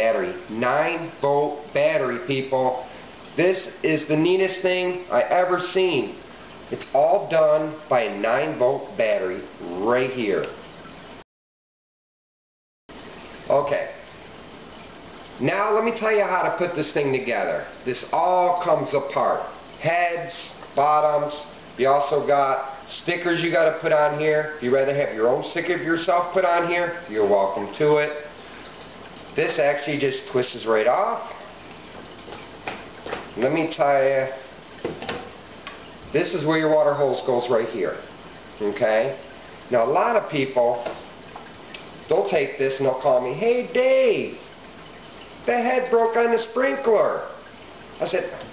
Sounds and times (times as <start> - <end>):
Speech: 0.0 - 10.6, 13.5 - 14.1, 15.4 - 28.3, 29.4 - 31.5, 33.4 - 34.5, 36.1 - 41.0, 42.1 - 44.5, 45.5 - 47.4, 48.0 - 48.5.